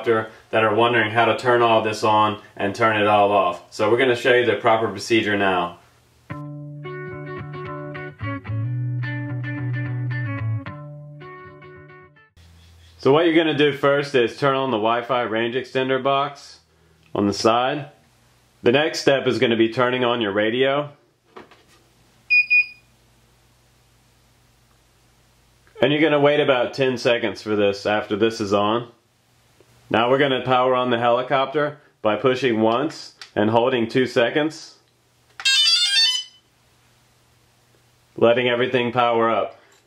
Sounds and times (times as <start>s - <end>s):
Speech: 0.0s - 5.8s, 13.0s - 18.0s, 18.6s - 21.0s, 25.8s - 29.0s, 29.9s - 34.9s, 38.2s - 39.6s
Inside, small room: 0.0s - 39.8s.